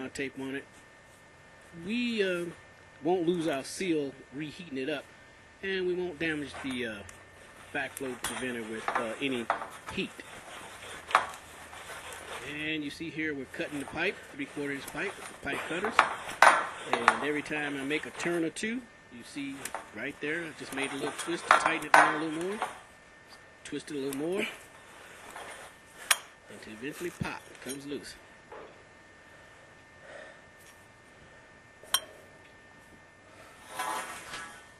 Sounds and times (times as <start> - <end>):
Speech: 0.0 - 0.7, 1.7 - 7.1, 7.7 - 10.3, 12.4 - 16.1, 16.8 - 22.7, 23.6 - 24.6, 26.5 - 28.2.